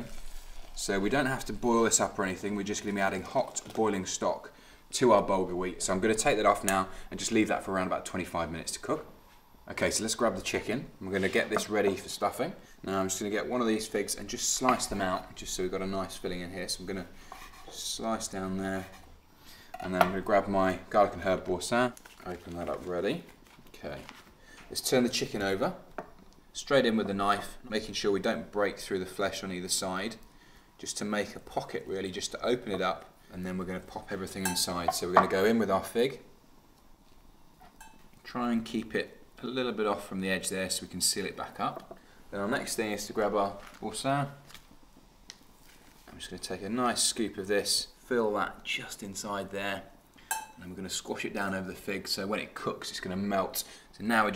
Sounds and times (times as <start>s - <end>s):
Speech: 0.8s - 17.1s, 17.7s - 19.0s, 19.8s - 25.9s, 26.6s - 30.2s, 30.8s - 36.3s, 38.2s - 44.4s, 46.1s - 50.0s, 50.6s - 54.3s.